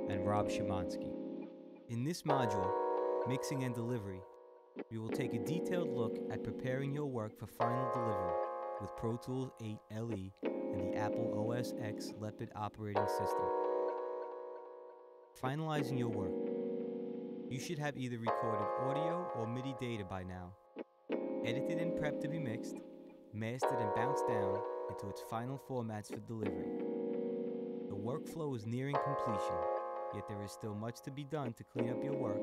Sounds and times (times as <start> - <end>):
Speech: 0.0 - 1.2, 1.9 - 4.3, 4.9 - 13.6, 15.4 - 16.4, 17.5 - 20.6, 21.5 - 22.8, 23.4 - 26.7, 27.9 - 32.4.